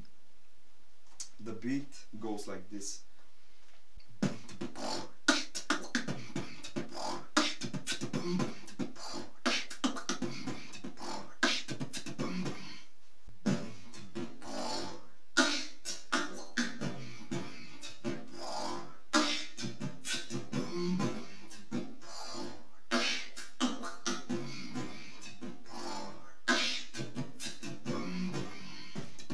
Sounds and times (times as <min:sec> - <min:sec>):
Inside, small room: 0:00.0 - 0:29.3
Beatboxing: 0:01.2 - 0:01.9, 0:04.2 - 0:29.3.